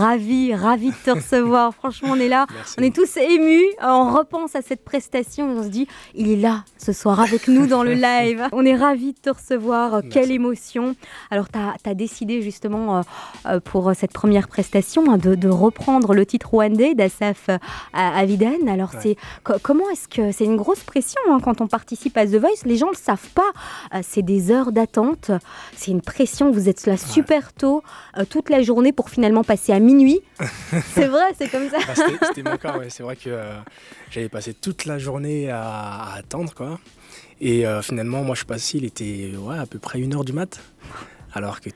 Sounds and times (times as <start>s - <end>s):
Speech: 0.0s - 30.2s, 31.0s - 36.8s, 37.4s - 40.6s, 41.3s - 41.7s
Music: 0.0s - 41.7s.